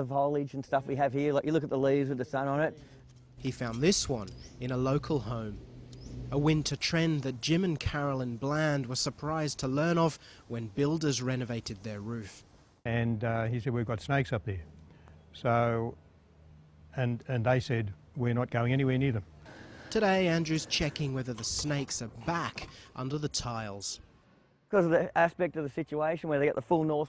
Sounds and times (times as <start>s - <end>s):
Speech: 0.0s - 2.8s, 3.4s - 5.6s, 6.4s - 14.7s, 15.4s - 16.0s, 17.0s - 19.3s, 19.9s - 24.0s, 24.7s - 27.0s.